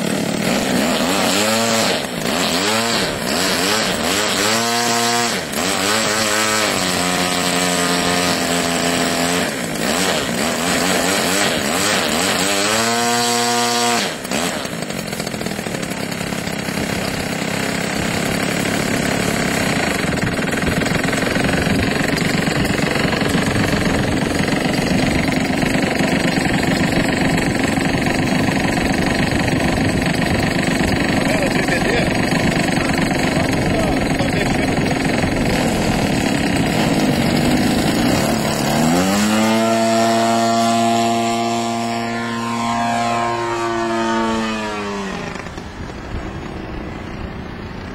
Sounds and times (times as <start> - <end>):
Accelerating, revving, vroom: 0.8 - 14.6, 38.8 - 45.3.